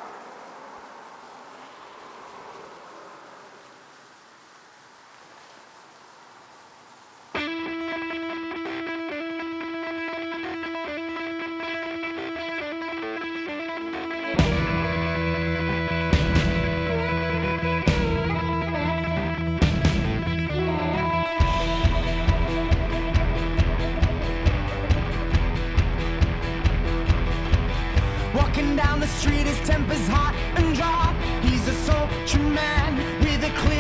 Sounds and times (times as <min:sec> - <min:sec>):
Music: 0:07.4 - 0:33.8.